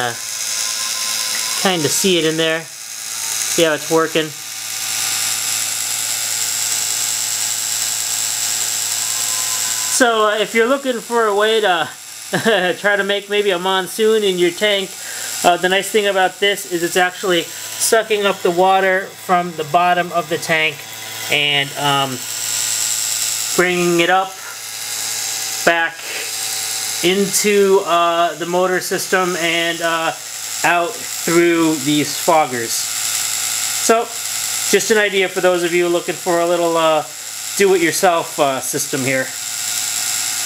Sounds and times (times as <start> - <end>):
Speech: 1.6 - 2.7, 3.4 - 4.4, 9.9 - 22.2, 23.6 - 24.5, 25.7 - 26.1, 27.0 - 32.9, 33.8 - 39.4.